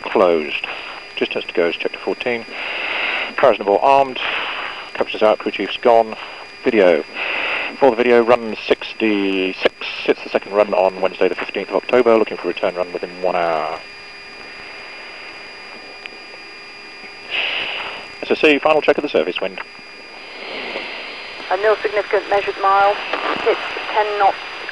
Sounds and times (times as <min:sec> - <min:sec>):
Speech: 0:00.0 - 0:02.5, 0:03.4 - 0:04.3, 0:05.0 - 0:07.1, 0:07.8 - 0:13.8, 0:18.2 - 0:19.6, 0:21.5 - 0:24.4.